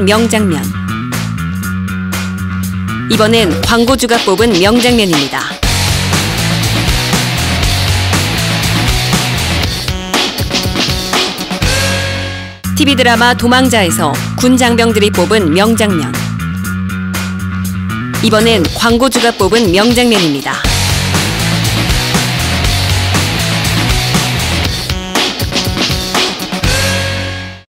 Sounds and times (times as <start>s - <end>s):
Speech: 0.0s - 0.8s, 3.1s - 5.6s, 12.8s - 16.2s, 18.2s - 20.7s
Music: 0.0s - 27.7s.